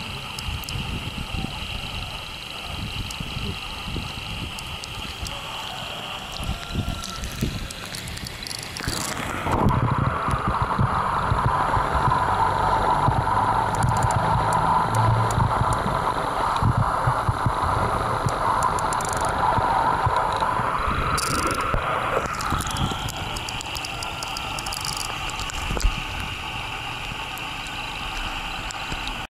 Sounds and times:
Gurgling: 0.0s - 29.3s
Stream: 0.0s - 29.3s.

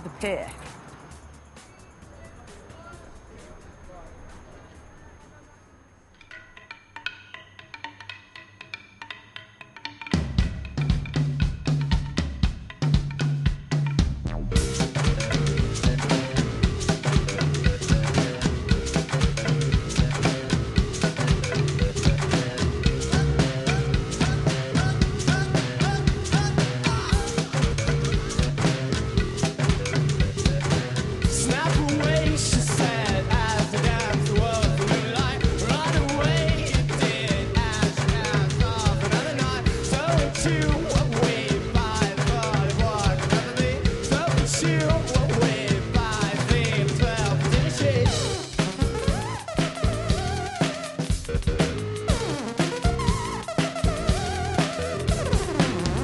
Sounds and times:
Music: 0.0s - 5.5s, 6.1s - 56.0s.

